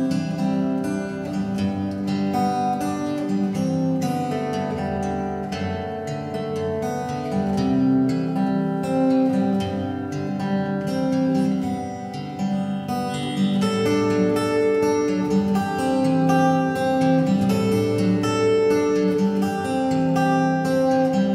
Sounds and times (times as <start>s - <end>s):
Acoustic guitar: 0.0s - 21.3s.